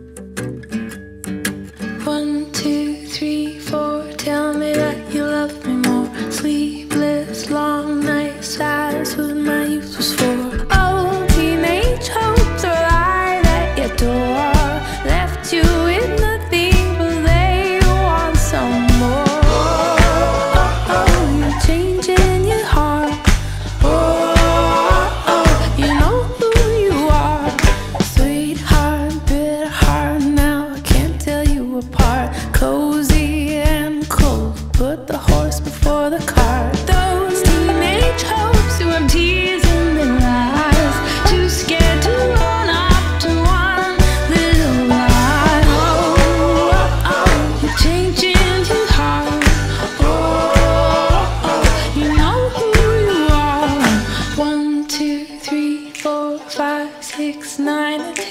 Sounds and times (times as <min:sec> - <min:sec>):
Music: 0:00.0 - 0:58.3.